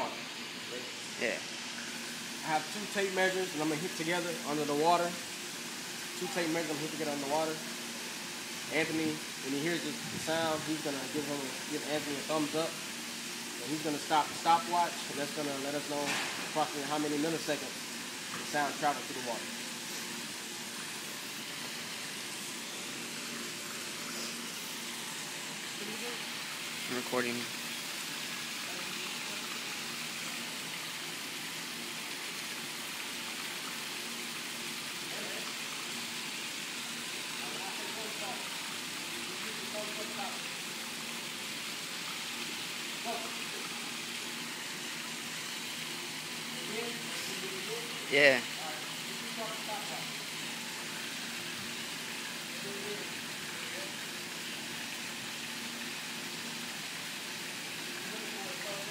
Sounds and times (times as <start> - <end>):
Speech: 2.4 - 5.2, 6.2 - 7.6, 8.7 - 12.8, 13.6 - 17.8, 18.5 - 19.5, 26.9 - 27.5, 37.4 - 38.5, 39.3 - 40.5, 46.6 - 50.1, 52.6 - 54.0, 58.0 - 58.9.